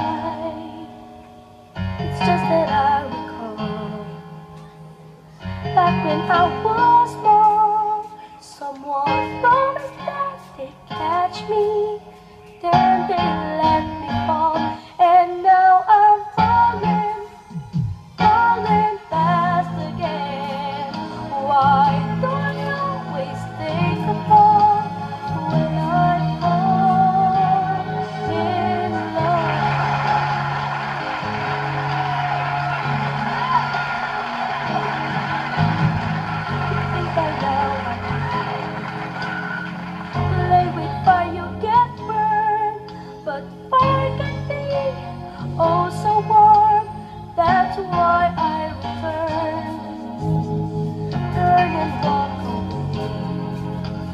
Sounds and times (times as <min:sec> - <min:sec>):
Music: 0:00.0 - 0:54.1
Shout: 0:29.0 - 0:39.8.